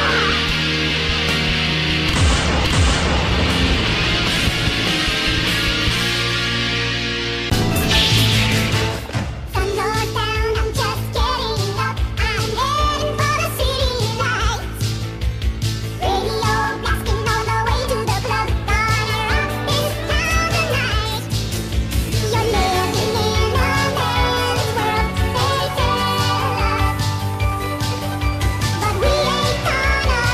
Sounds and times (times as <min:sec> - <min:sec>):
Rock and roll: 0:00.0 - 0:30.3.